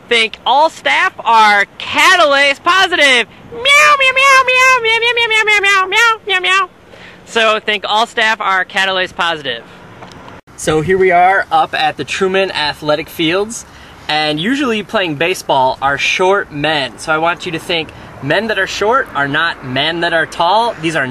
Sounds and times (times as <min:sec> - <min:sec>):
Speech: 0:00.0 - 0:06.7, 0:07.3 - 0:09.7, 0:10.5 - 0:21.1
Outside, urban or manmade: 0:00.0 - 0:21.1.